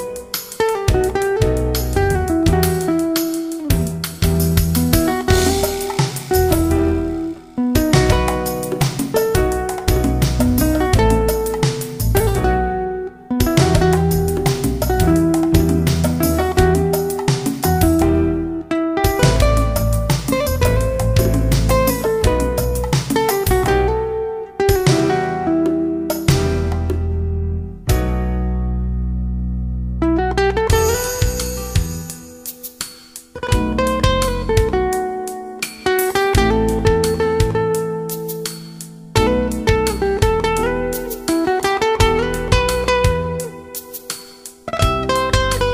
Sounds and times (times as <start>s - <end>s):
Middle Eastern music: 0.0s - 26.9s, 30.7s - 32.6s, 36.2s - 45.7s
Electric guitar: 0.0s - 28.2s
Bass guitar: 0.0s - 32.5s, 33.4s - 35.3s, 36.2s - 44.0s, 44.6s - 45.7s
Rhythm and blues: 0.0s - 45.7s
Strum: 0.0s - 45.7s.